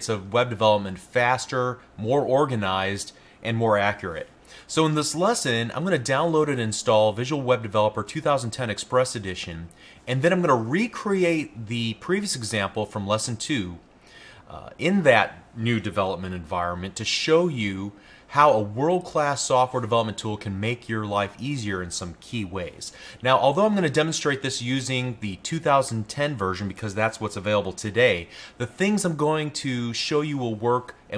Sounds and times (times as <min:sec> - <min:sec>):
Speech: 0:00.0 - 0:13.8, 0:14.5 - 0:31.1.